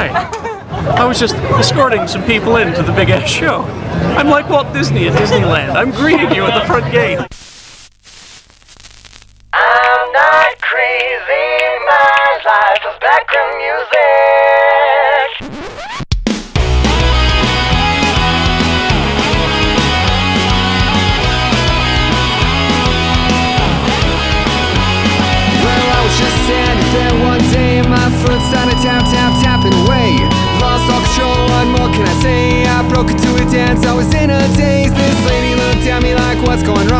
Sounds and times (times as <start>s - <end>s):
Disco: 16.7s - 36.9s.